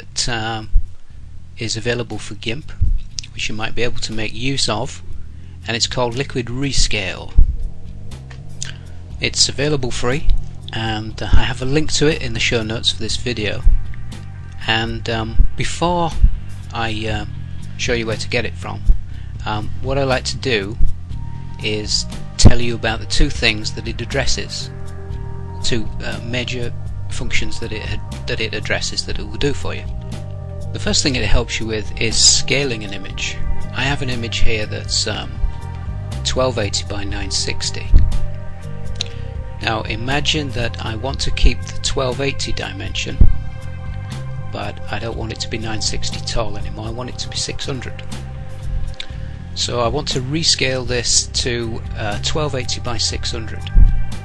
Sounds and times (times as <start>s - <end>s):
Speech: 0.0s - 0.7s, 1.6s - 5.0s, 5.6s - 7.4s, 9.2s - 13.7s, 14.6s - 20.8s, 21.6s - 24.7s, 25.6s - 29.9s, 30.8s - 35.4s, 36.2s - 38.0s, 39.6s - 43.3s, 44.6s - 48.1s, 49.6s - 53.7s
Music: 0.0s - 54.2s.